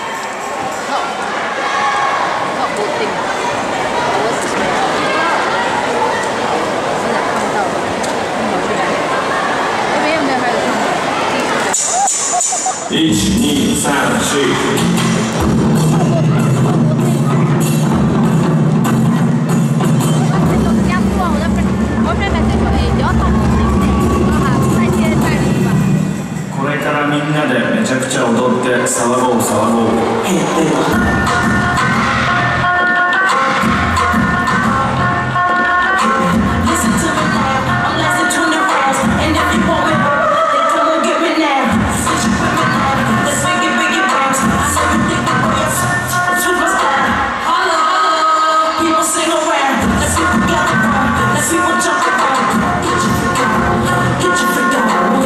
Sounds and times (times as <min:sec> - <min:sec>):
Speech: 0:12.9 - 0:14.8, 0:15.8 - 0:17.6, 0:20.1 - 0:25.8, 0:26.6 - 0:31.0
Music: 0:12.9 - 0:26.7, 0:30.3 - 0:55.2.